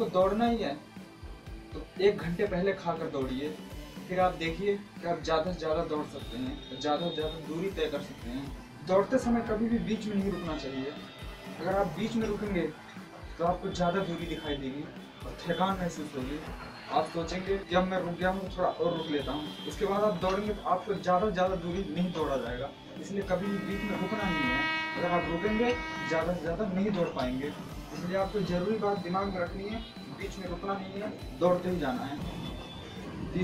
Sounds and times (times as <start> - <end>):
Male speech, man speaking: 0.0 - 0.8, 1.8 - 11.0, 11.6 - 12.8, 13.4 - 32.3
Music: 0.0 - 33.4.